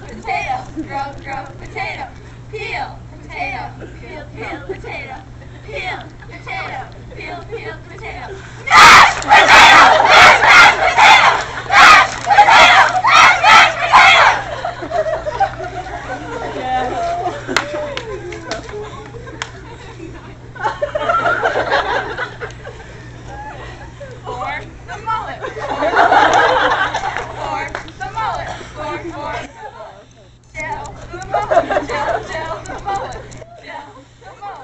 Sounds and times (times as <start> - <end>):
Outside, urban or manmade: 0.0 - 34.6.